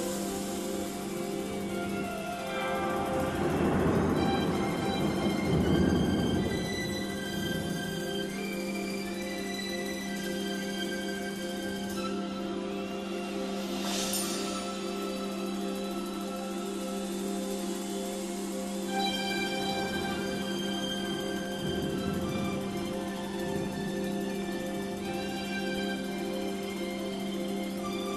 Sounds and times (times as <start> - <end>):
Music: 0.0 - 28.1.